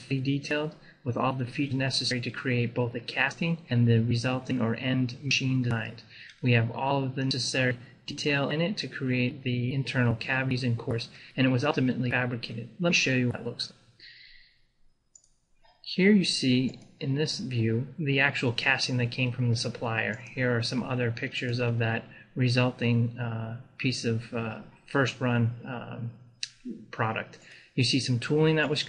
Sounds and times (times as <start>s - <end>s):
Speech: 0.0s - 14.3s, 15.9s - 28.8s.